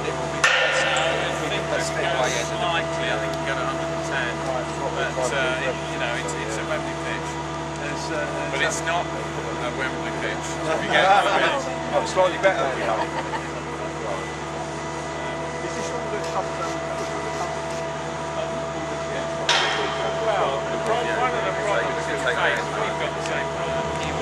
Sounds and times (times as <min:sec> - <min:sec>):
Speech: 0:00.0 - 0:24.2.